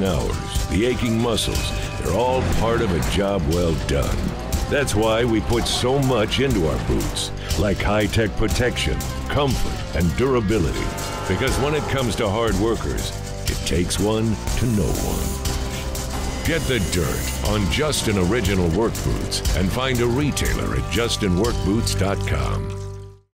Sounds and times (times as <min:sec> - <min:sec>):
Speech: 0:00.0 - 0:15.3, 0:16.4 - 0:22.7
Music: 0:00.0 - 0:23.3.